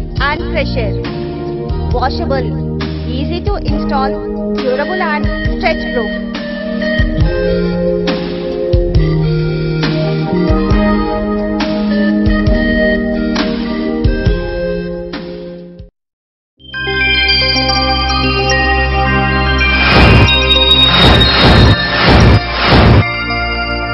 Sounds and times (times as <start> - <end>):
Music: 0.0 - 15.9, 16.6 - 23.9.